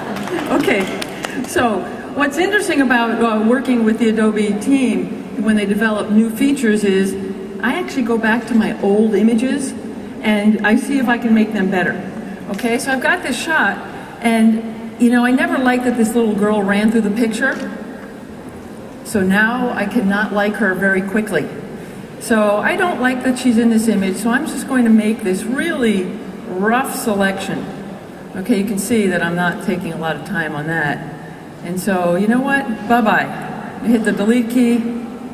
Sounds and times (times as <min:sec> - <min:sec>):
Speech: 0:00.4 - 0:17.8, 0:19.0 - 0:21.6, 0:22.2 - 0:31.0, 0:31.6 - 0:35.1.